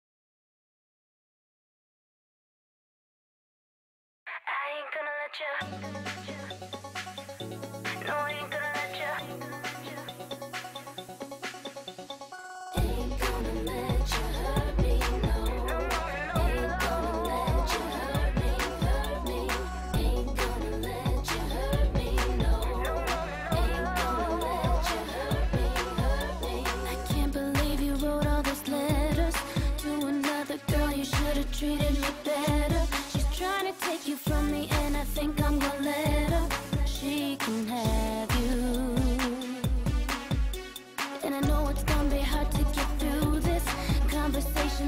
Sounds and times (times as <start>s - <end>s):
Music: 5.4s - 44.8s.